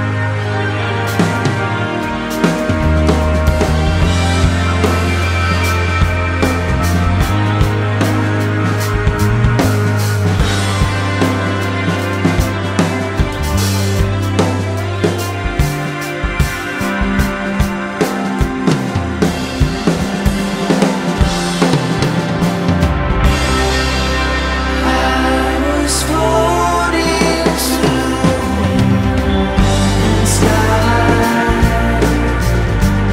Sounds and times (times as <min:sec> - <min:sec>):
Music: 0:00.0 - 0:33.1.